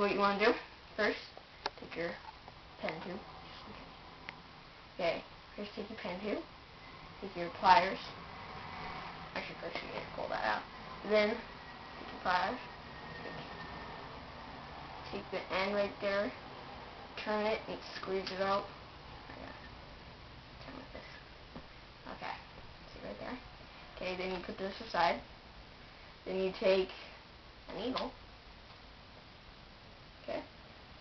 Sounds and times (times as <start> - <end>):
Speech: 0.0 - 2.2, 2.8 - 3.8, 5.0 - 6.5, 7.2 - 8.2, 9.4 - 11.4, 12.2 - 12.7, 15.1 - 16.4, 17.2 - 18.7, 22.1 - 23.4, 24.0 - 25.2, 26.3 - 27.1, 27.7 - 28.2, 30.2 - 30.5.